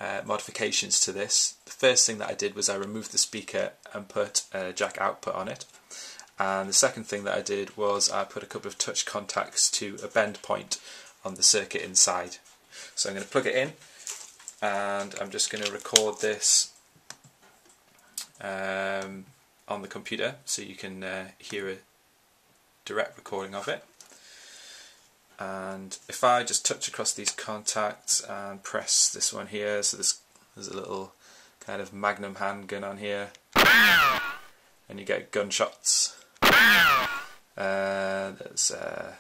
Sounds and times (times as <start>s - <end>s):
Speech: 0.0s - 5.8s, 6.4s - 13.8s, 14.6s - 16.8s, 18.2s - 21.9s, 22.8s - 23.9s, 25.4s - 33.4s, 34.9s - 36.2s, 37.6s - 39.2s.